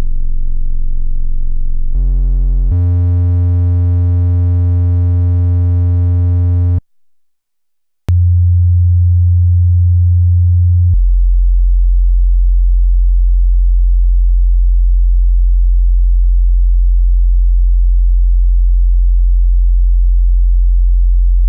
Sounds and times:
Sine wave: 0.0s - 6.8s, 8.1s - 21.4s.

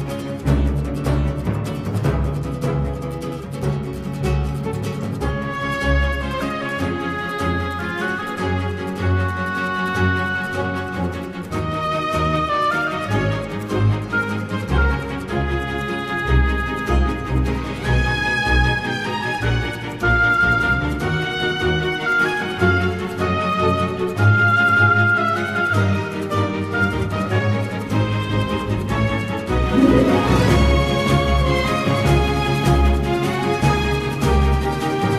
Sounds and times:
Music: 0.0s - 35.1s.

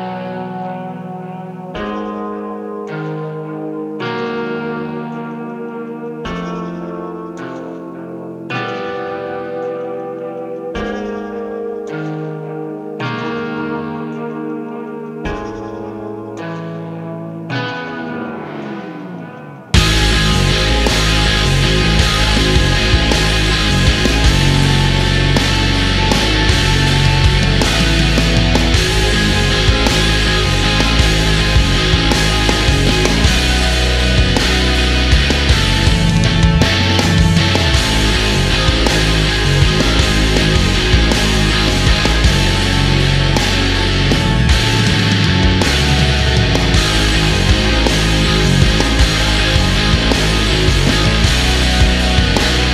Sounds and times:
Music: 0.0s - 52.7s.

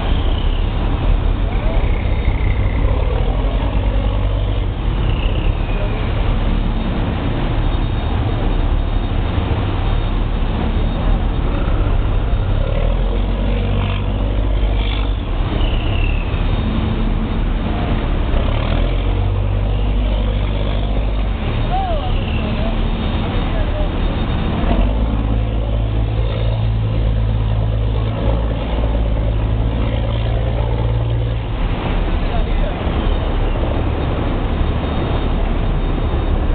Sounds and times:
Speech: 21.1s - 26.4s, 31.9s - 33.7s.

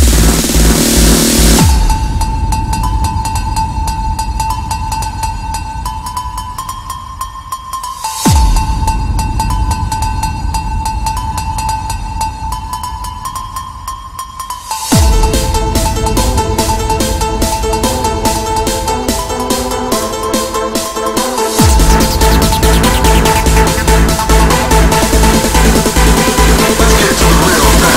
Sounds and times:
Techno: 0.0s - 27.9s.

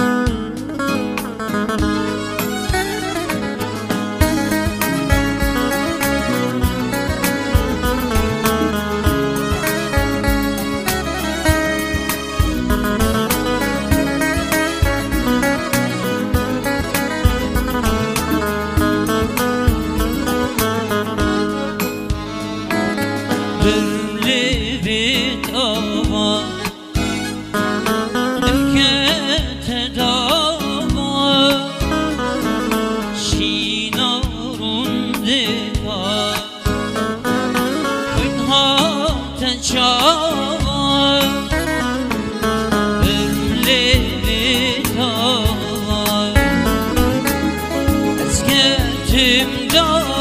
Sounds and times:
Music: 0.0s - 50.2s.

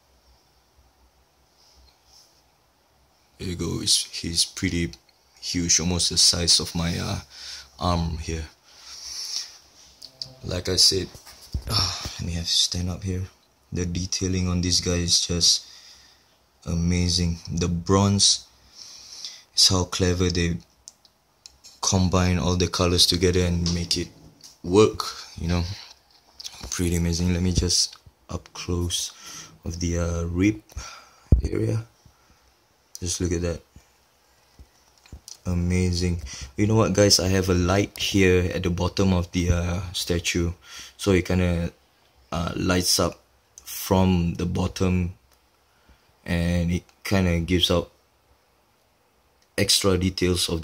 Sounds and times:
Inside, small room: 0.0s - 50.6s
Speech: 3.4s - 8.6s, 10.0s - 15.6s, 16.6s - 18.5s, 19.6s - 20.7s, 21.8s - 25.9s, 26.5s - 30.8s, 31.4s - 31.9s, 33.0s - 33.7s, 35.3s - 45.2s, 46.2s - 48.0s, 49.6s - 50.6s.

